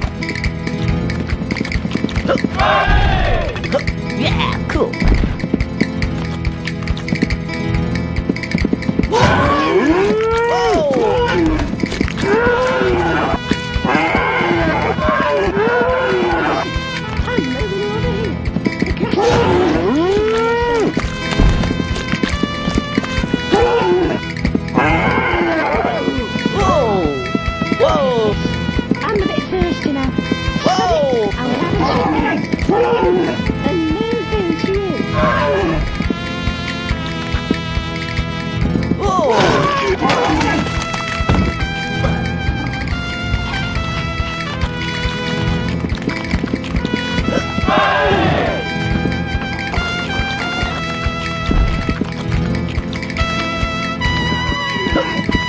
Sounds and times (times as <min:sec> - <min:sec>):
Run: 0:00.0 - 0:04.2, 0:05.0 - 0:55.4
Music: 0:00.0 - 0:55.4.